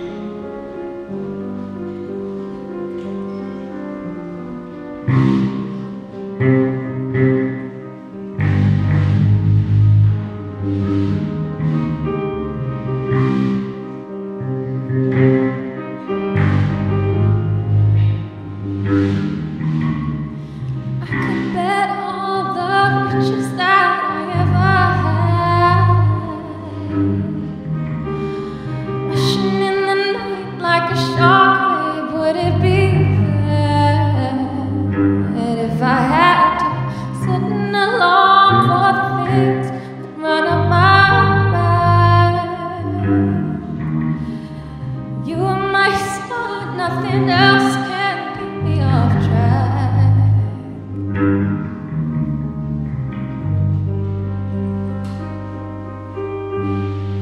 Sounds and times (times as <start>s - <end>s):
Music: 0.0s - 57.2s.